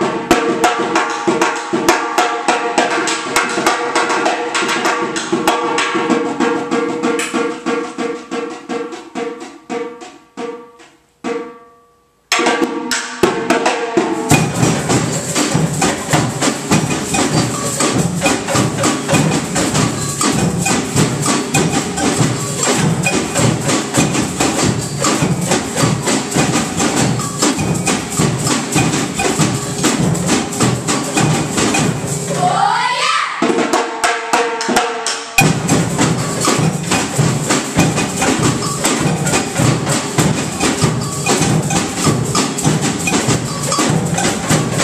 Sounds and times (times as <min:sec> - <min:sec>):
Inside, large room or hall: 0:00.0 - 0:44.8
Music: 0:00.0 - 0:44.8.